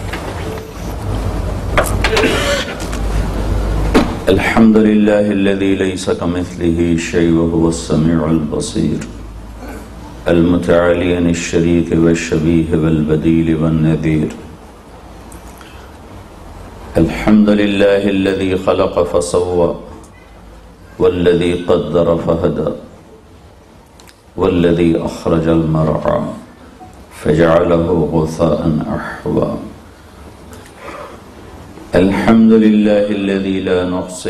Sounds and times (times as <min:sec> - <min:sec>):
Narration, monologue: 0:00.0 - 0:34.2
Male speech, man speaking: 0:04.3 - 0:09.2, 0:10.3 - 0:14.5, 0:17.0 - 0:20.0, 0:21.0 - 0:22.9, 0:24.4 - 0:26.5, 0:27.2 - 0:29.8, 0:32.0 - 0:34.2.